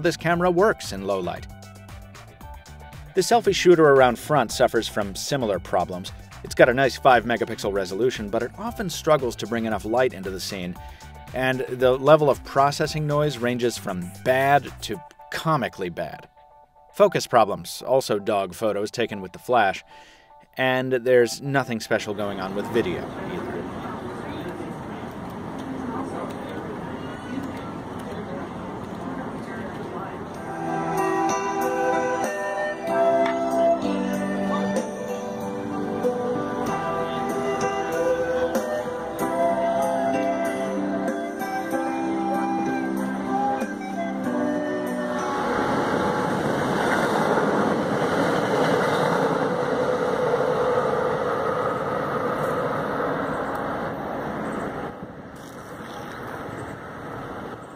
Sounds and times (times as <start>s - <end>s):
Outside, urban or manmade: 0.0s - 15.6s, 21.8s - 57.7s.